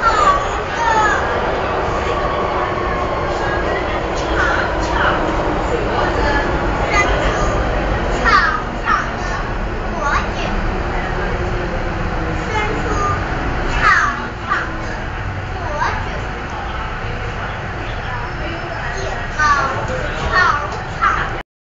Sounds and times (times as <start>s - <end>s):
Child speech, kid speaking: 0.0s - 10.7s, 12.4s - 16.8s, 18.0s - 21.4s
Female speech, woman speaking: 14.4s - 21.4s.